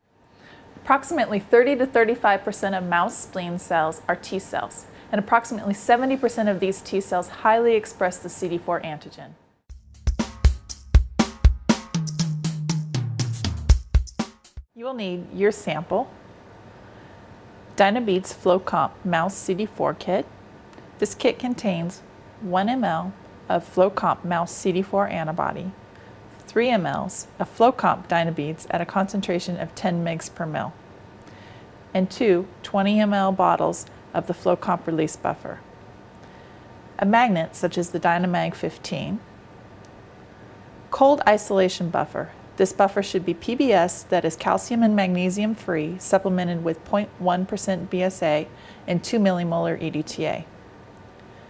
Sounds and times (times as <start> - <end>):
Speech: 0.8 - 9.4, 14.8 - 16.1, 17.8 - 20.3, 21.0 - 25.8, 26.4 - 30.8, 32.0 - 35.6, 37.0 - 39.3, 40.9 - 50.5.